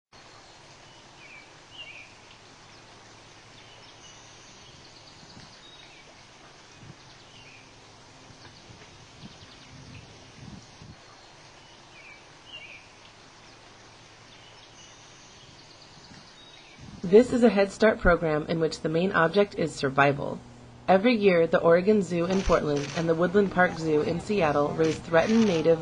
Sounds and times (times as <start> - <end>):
Outside, rural or natural: 0.1 - 25.8.